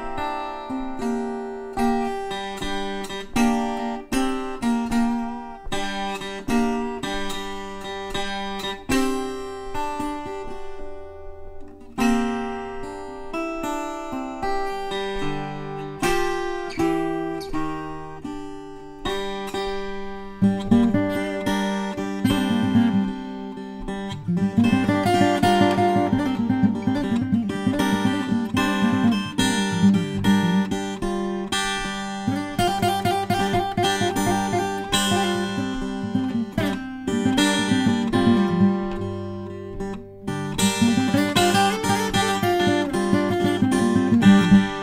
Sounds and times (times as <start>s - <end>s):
Mandolin: 0.0s - 44.8s.